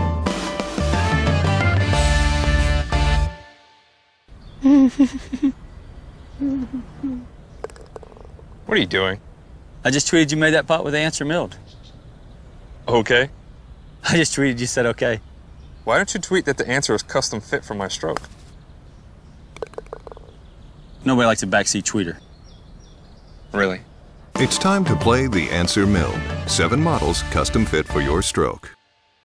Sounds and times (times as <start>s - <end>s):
Chirp, tweet: 4.3s - 4.6s, 5.6s - 6.6s, 11.6s - 17.0s, 18.5s - 24.4s.